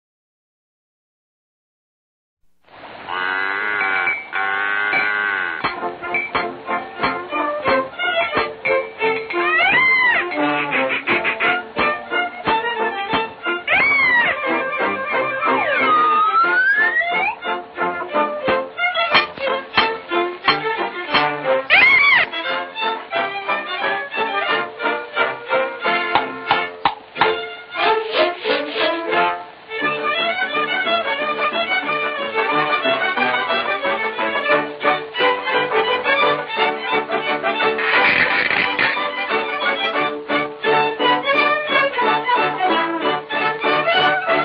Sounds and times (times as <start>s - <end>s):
Music: 4.0s - 44.4s.